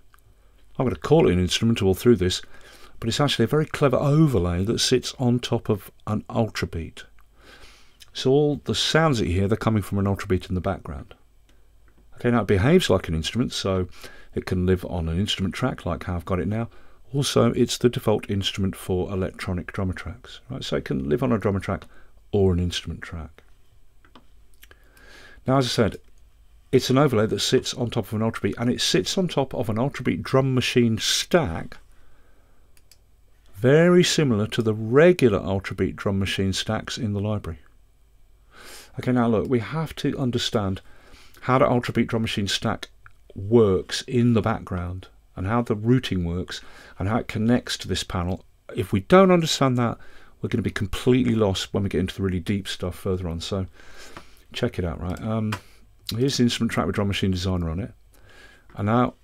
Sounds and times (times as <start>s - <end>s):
Speech: 0.8s - 7.2s, 8.0s - 11.2s, 12.1s - 23.5s, 25.4s - 26.1s, 26.7s - 31.8s, 33.6s - 37.7s, 38.9s - 53.7s, 54.5s - 58.0s, 58.7s - 59.2s.